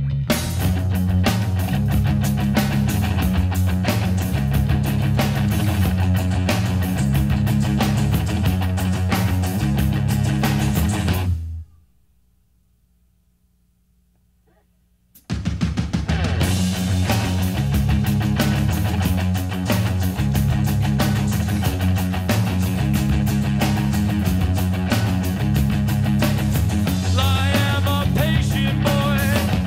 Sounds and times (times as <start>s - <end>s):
Music: 0.0s - 11.9s, 15.2s - 29.6s.